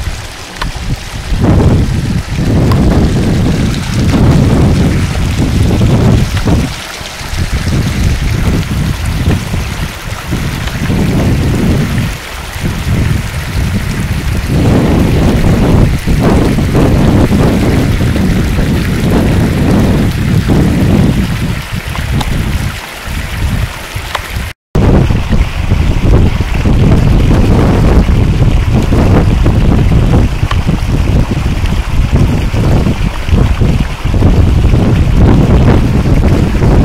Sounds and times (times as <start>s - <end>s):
Outside, rural or natural: 0.0s - 36.8s.